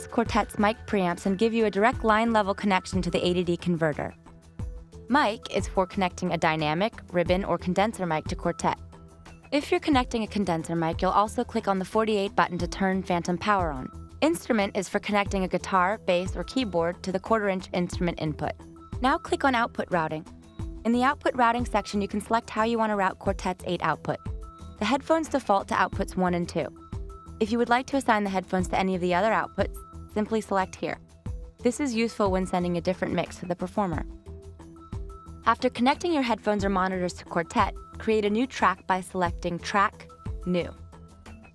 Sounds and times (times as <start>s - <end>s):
Speech: 0.0s - 4.1s, 5.1s - 8.8s, 9.6s - 20.2s, 20.9s - 24.2s, 24.8s - 26.7s, 27.4s - 31.0s, 31.6s - 34.0s, 35.5s - 40.8s
Music: 0.0s - 41.5s.